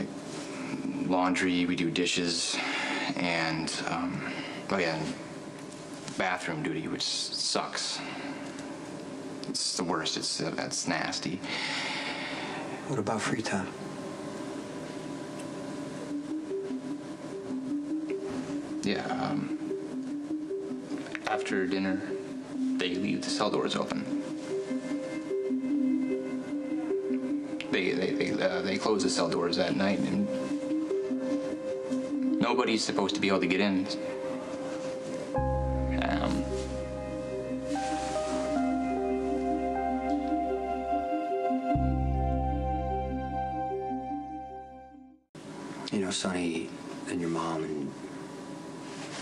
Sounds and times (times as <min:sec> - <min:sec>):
Speech: 0:00.9 - 0:02.6, 0:03.2 - 0:05.2, 0:06.2 - 0:08.0, 0:09.5 - 0:11.4, 0:12.9 - 0:13.8, 0:18.8 - 0:19.5, 0:21.2 - 0:22.1, 0:22.8 - 0:24.1, 0:27.6 - 0:30.3, 0:32.4 - 0:34.0, 0:36.0 - 0:36.5, 0:45.9 - 0:48.0
New-age music: 0:15.8 - 0:45.3.